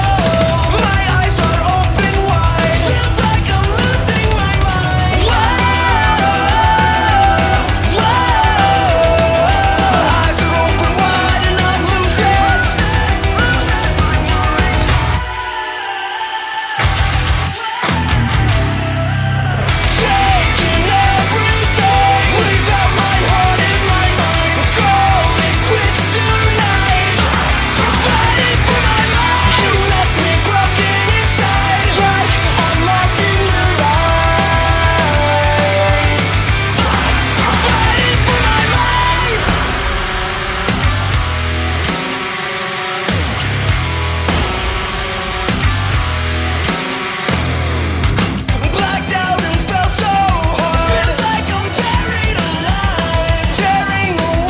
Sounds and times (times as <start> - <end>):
Pop music: 0.0 - 54.4.